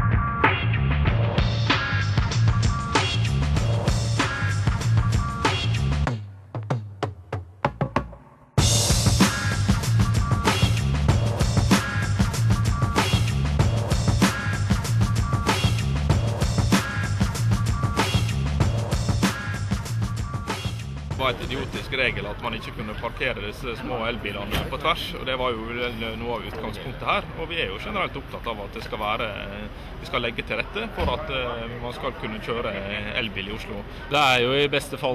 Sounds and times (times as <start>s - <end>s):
Speech: 21.1s - 35.1s.